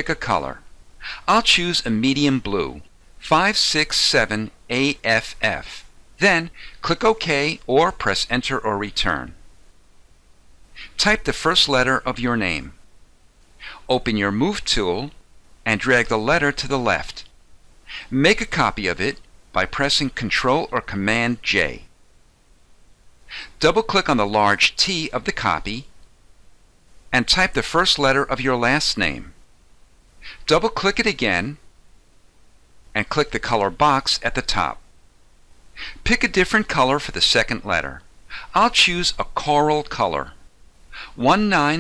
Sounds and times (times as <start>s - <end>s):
Narration, monologue: 0.0s - 41.8s.